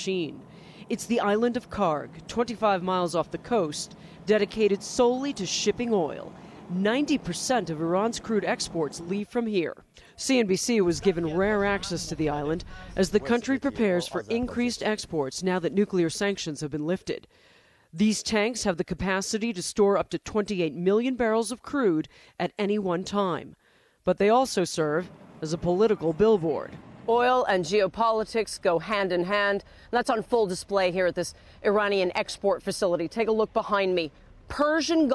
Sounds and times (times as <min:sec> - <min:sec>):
Speech: 0:00.0 - 0:17.3, 0:18.0 - 0:35.1.